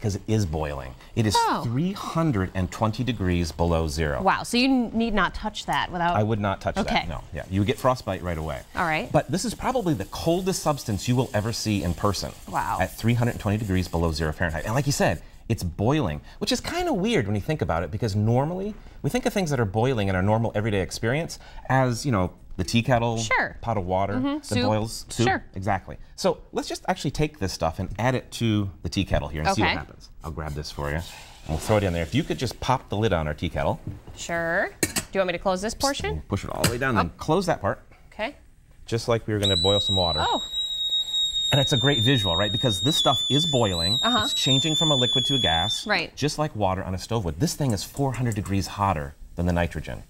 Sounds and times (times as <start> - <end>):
Speech: 0.0 - 4.7, 6.4 - 33.8, 35.8 - 40.1, 41.6 - 50.0.